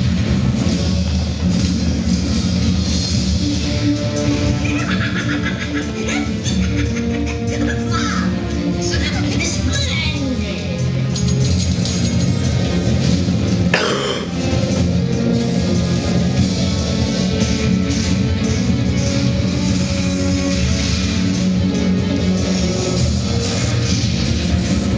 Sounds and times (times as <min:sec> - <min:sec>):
Music: 0:00.0 - 0:24.9
Speech: 0:07.9 - 0:10.8.